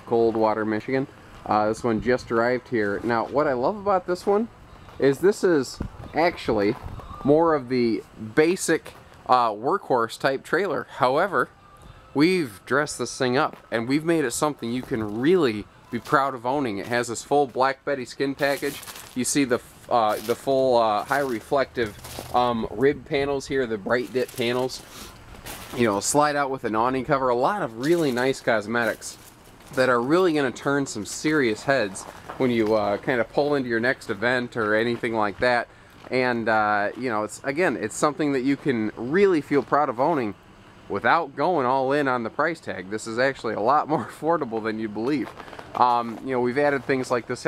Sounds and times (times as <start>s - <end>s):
Speech: 0.0s - 11.5s, 12.2s - 24.8s, 25.8s - 47.4s.